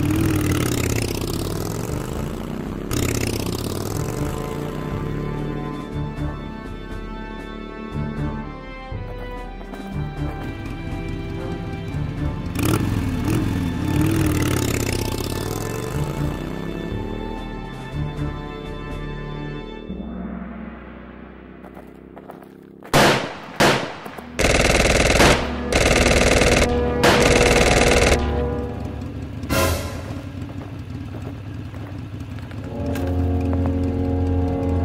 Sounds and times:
Machine gun: 0:23.0 - 0:28.4.

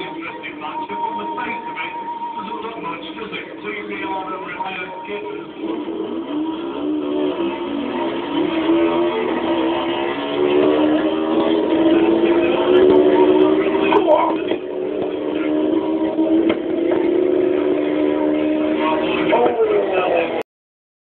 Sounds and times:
Speech: 0:00.0 - 0:05.5, 0:13.4 - 0:14.6, 0:18.8 - 0:20.4
Car: 0:00.0 - 0:20.4.

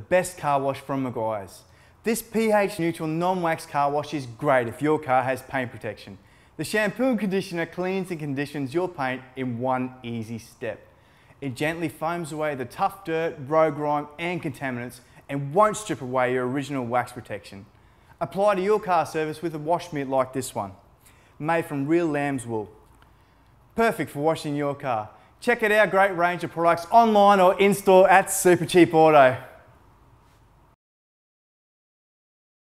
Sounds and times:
Speech: 0:00.0 - 0:10.8, 0:11.4 - 0:20.8, 0:21.4 - 0:22.8, 0:23.8 - 0:29.6.

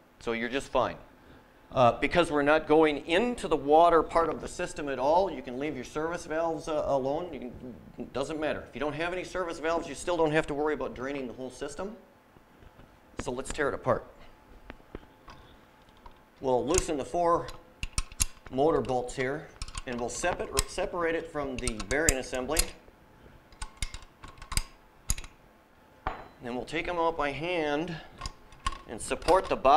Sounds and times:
Speech: 0:00.2 - 0:01.1, 0:01.7 - 0:12.0, 0:13.2 - 0:14.2, 0:16.4 - 0:17.6, 0:18.5 - 0:22.8, 0:26.4 - 0:28.1, 0:28.9 - 0:29.7.

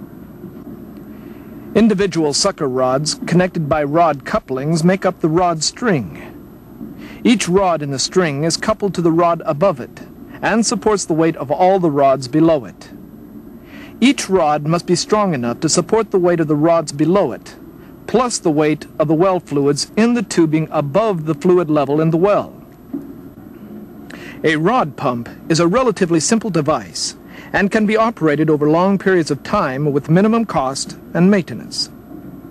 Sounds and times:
Speech: 0:01.8 - 0:06.4, 0:07.2 - 0:13.0, 0:14.0 - 0:22.6, 0:24.4 - 0:32.0.

